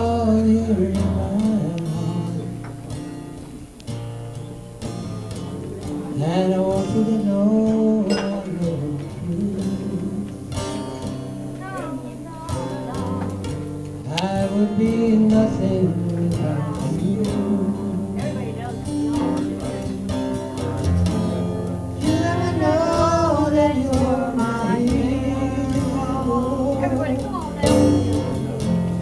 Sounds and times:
Male singing: 0:00.0 - 0:02.7, 0:06.1 - 0:10.4, 0:14.0 - 0:18.7, 0:22.0 - 0:29.0
Music: 0:00.0 - 0:29.0.

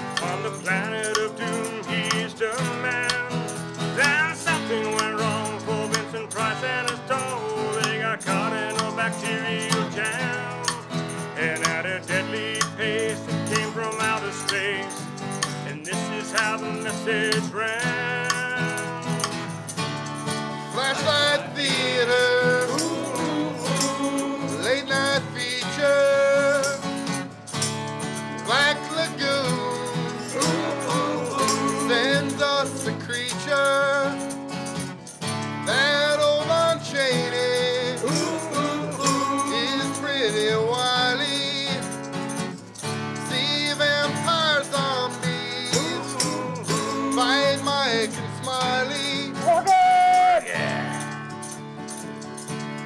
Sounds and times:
Independent music: 0:00.0 - 0:52.8.

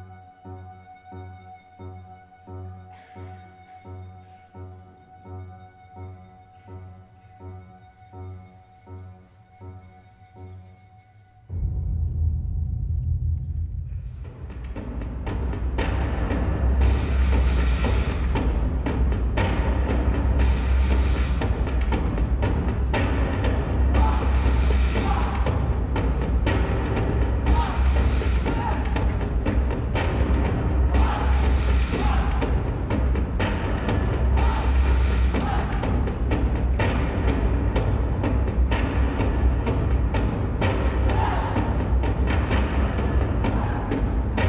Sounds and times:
Timpani: 0:00.0 - 0:44.4.

